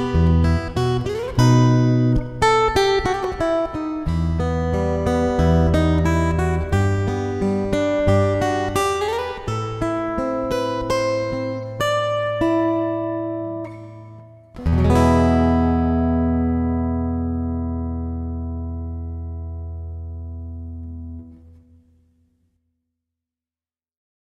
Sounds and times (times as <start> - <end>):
Acoustic guitar: 0.0 - 22.4.